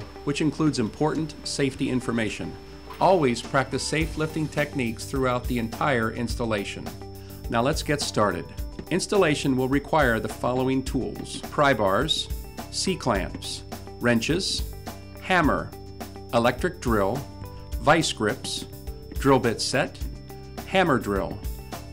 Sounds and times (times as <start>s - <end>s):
Music: 0.0s - 21.9s
Speech: 0.3s - 6.9s, 7.5s - 15.7s, 16.4s - 20.1s, 20.7s - 21.4s.